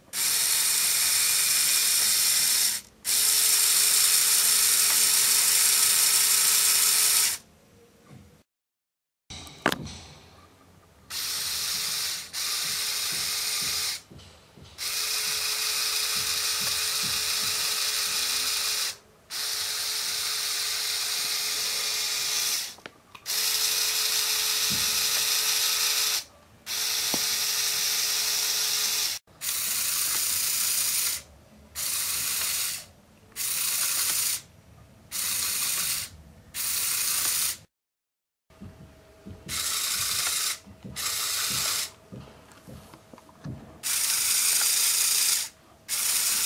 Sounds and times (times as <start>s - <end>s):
Tools: 11.1s - 19.0s.